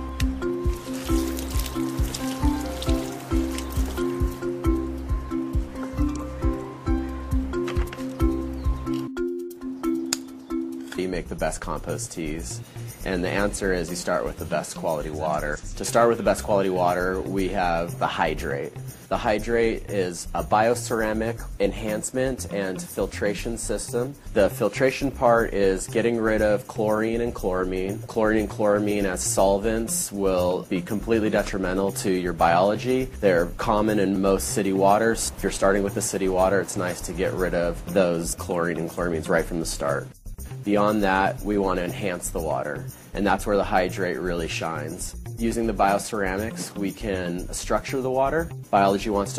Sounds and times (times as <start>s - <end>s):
Music: 0.0s - 49.3s
Speech: 11.0s - 49.3s.